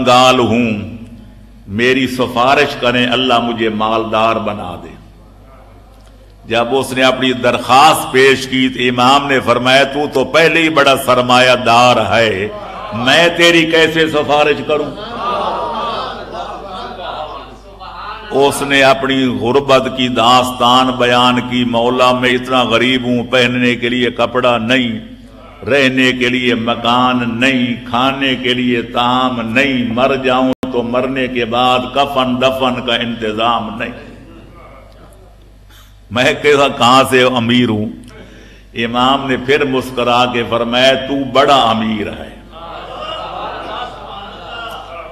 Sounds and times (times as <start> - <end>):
Male speech, man speaking: 0.0 - 1.0, 1.7 - 5.0, 6.4 - 15.0, 16.7 - 35.3, 36.1 - 38.1, 38.8 - 42.4
Narration, monologue: 0.0 - 45.1.